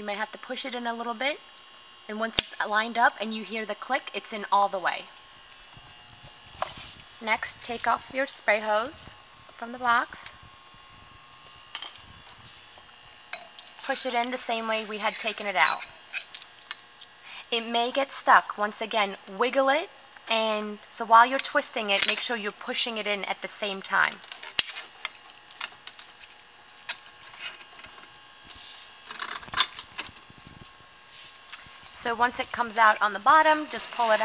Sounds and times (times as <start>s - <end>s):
Speech: 0.0s - 1.4s, 2.1s - 5.1s, 7.2s - 10.4s, 13.8s - 15.9s, 17.5s - 24.2s, 32.0s - 34.2s.